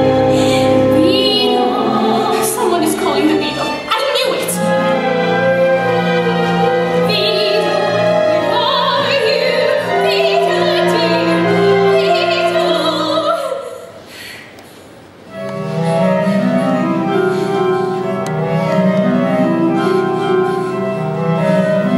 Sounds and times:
Music: 0.0s - 14.0s, 15.2s - 21.9s.

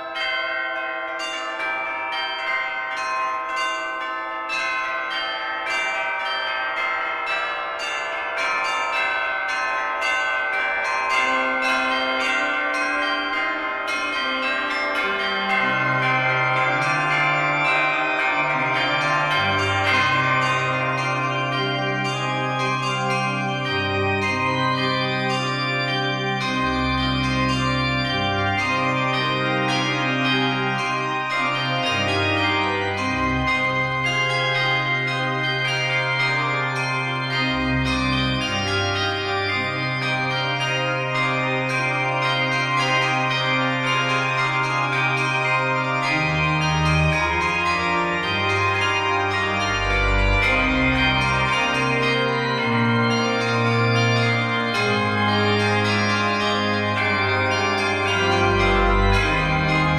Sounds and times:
Change ringing (campanology): 0.0s - 59.9s
Tubular bells: 0.0s - 59.9s.

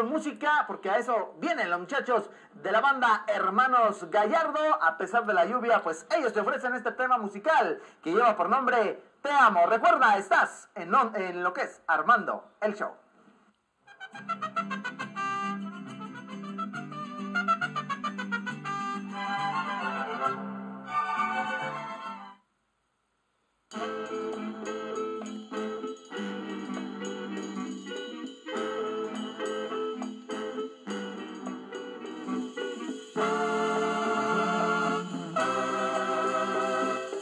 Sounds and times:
Music: 13.8s - 22.5s, 23.7s - 37.2s.

